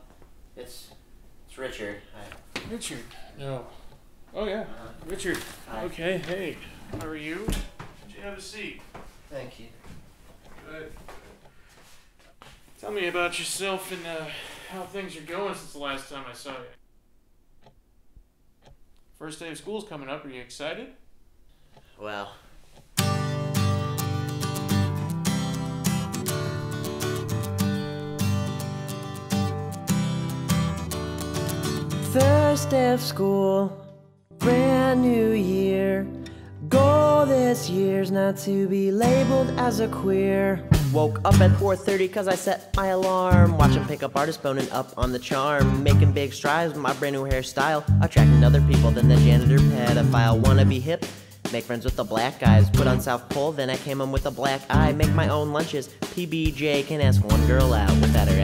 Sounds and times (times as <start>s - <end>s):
Speech: 0.6s - 9.8s, 10.6s - 11.0s, 12.8s - 16.8s, 19.2s - 21.0s, 22.0s - 22.4s, 46.2s - 58.4s
Music: 23.0s - 58.4s.